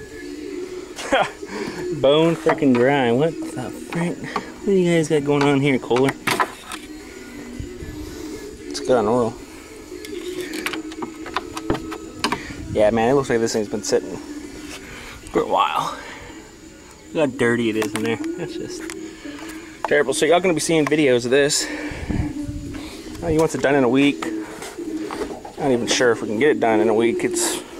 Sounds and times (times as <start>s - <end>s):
Music: 0.0s - 27.7s
Speech: 2.0s - 6.2s, 12.7s - 14.2s, 19.9s - 21.7s, 23.2s - 24.3s, 25.6s - 27.6s.